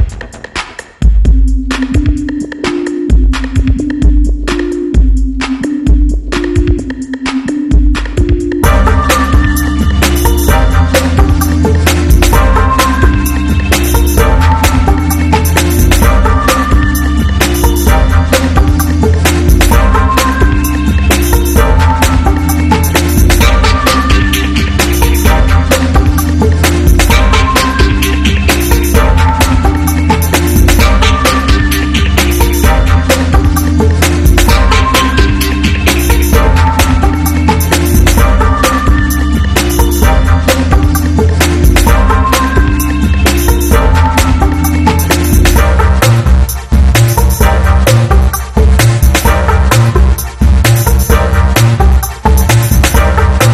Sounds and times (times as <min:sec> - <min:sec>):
Music: 0:00.0 - 0:53.5.